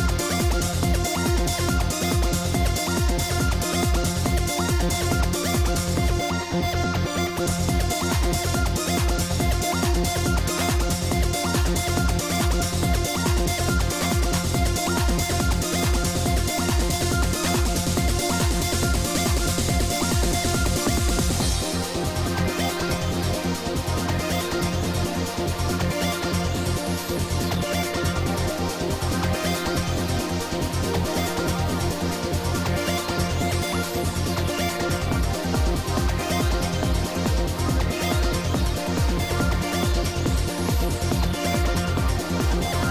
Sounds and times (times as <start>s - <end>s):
Music: 0.0s - 42.9s.